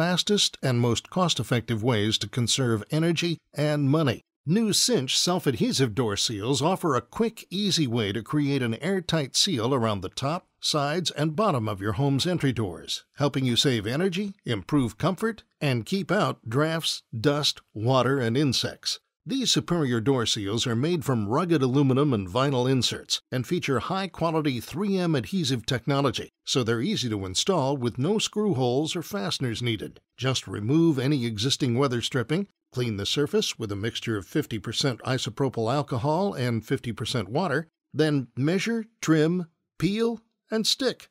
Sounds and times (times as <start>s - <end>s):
Speech: 0.0s - 41.1s.